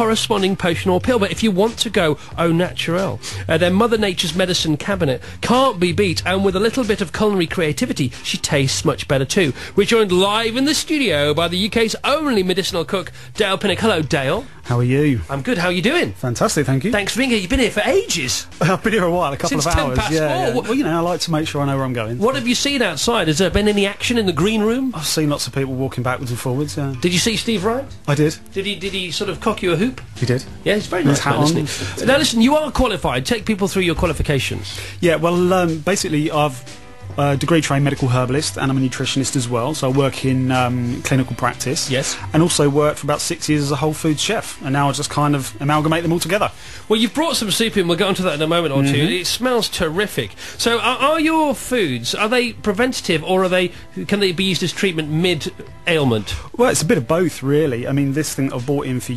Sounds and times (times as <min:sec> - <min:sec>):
Music: 0:00.0 - 0:59.1
Speech: 0:00.0 - 0:59.1.